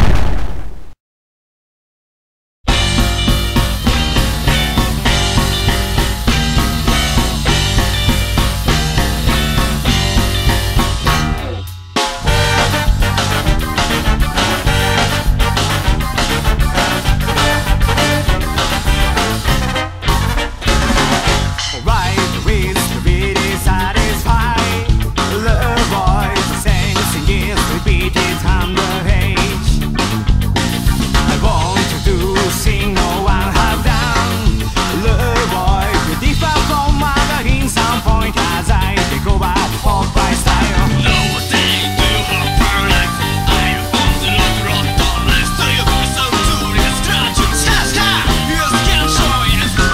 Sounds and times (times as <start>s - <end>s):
Music: 2.7s - 49.9s.